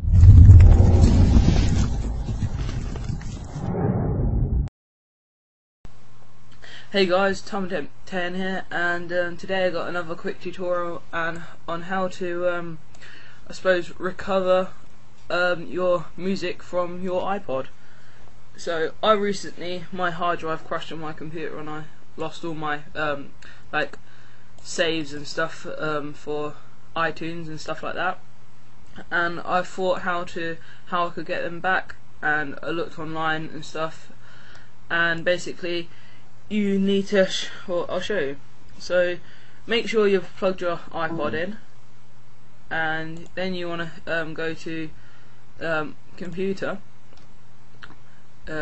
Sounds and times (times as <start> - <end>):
Speech: 6.8 - 12.8, 13.5 - 17.7, 18.6 - 24.0, 24.6 - 28.2, 29.0 - 34.2, 34.9 - 35.9, 36.5 - 41.7, 42.7 - 45.0, 45.6 - 46.9, 47.8 - 48.6.